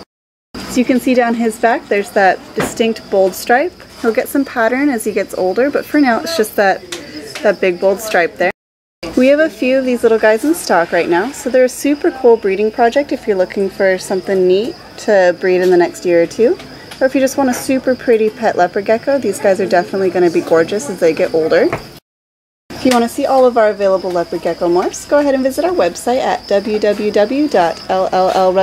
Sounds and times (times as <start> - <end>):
Speech: 0.7 - 21.8, 22.8 - 28.6.